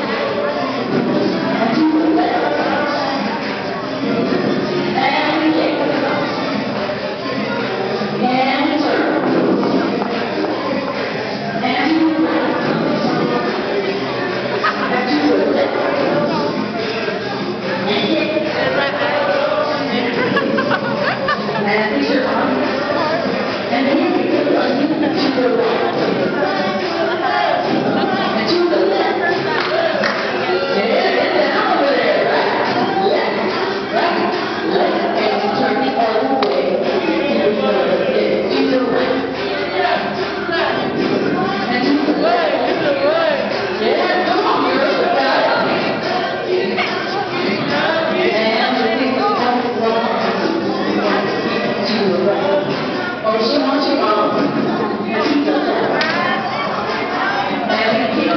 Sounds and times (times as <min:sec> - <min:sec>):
Dance music: 0:00.0 - 0:58.3
Speech: 0:00.0 - 0:58.3.